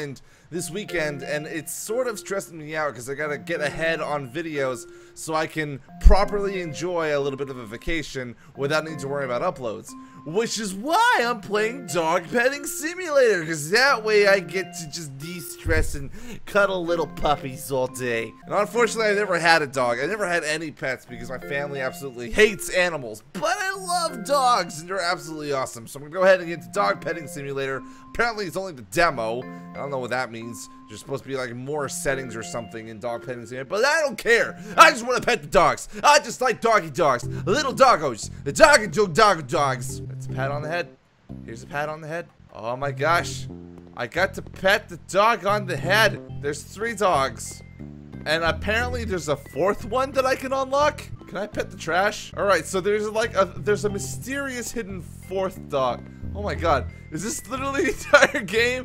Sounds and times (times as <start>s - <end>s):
Speech: 0.0s - 40.9s, 41.5s - 47.6s, 48.3s - 58.8s
Music: 0.0s - 58.8s.